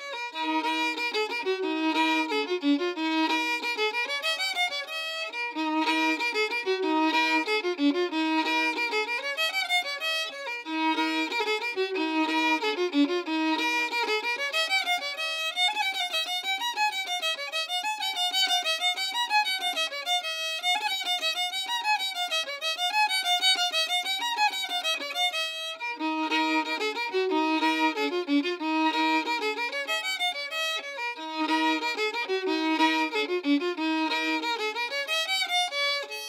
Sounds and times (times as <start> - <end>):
Violin, fiddle: 0.0 - 36.2.